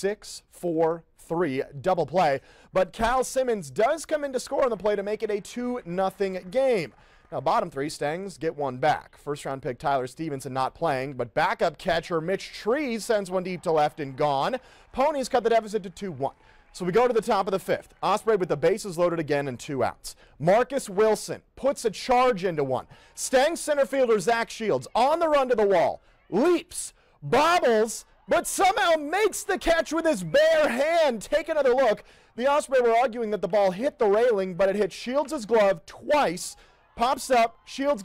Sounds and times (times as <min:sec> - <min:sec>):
Speech: 0:00.0 - 0:38.0.